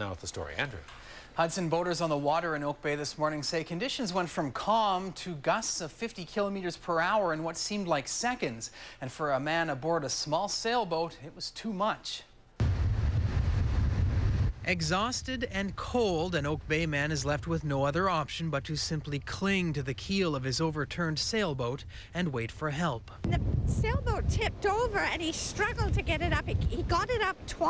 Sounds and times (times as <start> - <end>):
Speech: 1.4 - 12.3, 14.7 - 27.6.